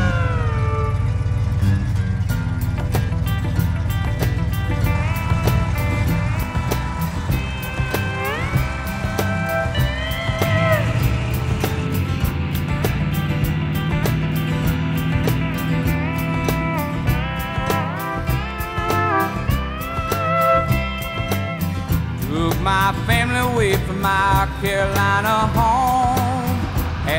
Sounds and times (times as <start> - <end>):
Music: 0.0 - 27.1.